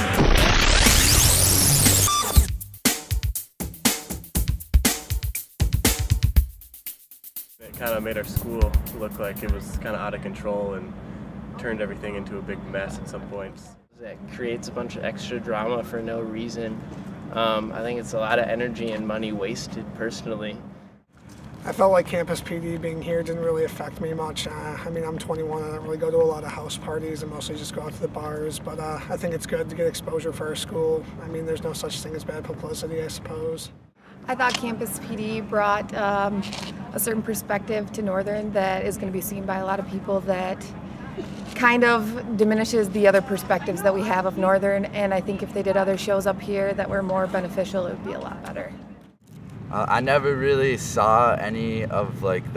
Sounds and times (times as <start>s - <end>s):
Speech: 7.6s - 10.9s, 17.4s - 20.6s, 21.7s - 33.7s, 49.8s - 52.5s.